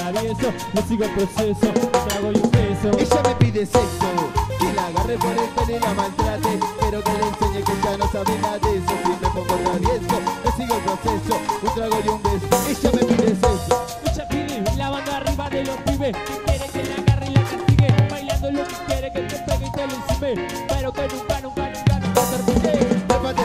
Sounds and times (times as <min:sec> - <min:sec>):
Music: 0:00.0 - 0:23.4.